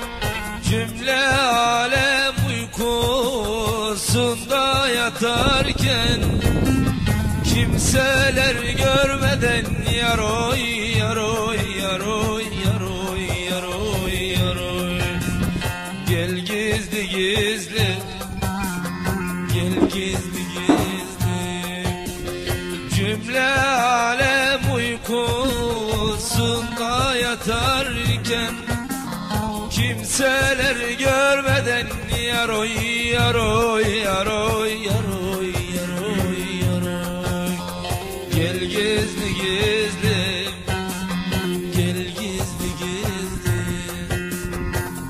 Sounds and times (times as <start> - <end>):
Middle Eastern music: 0.0 - 45.0.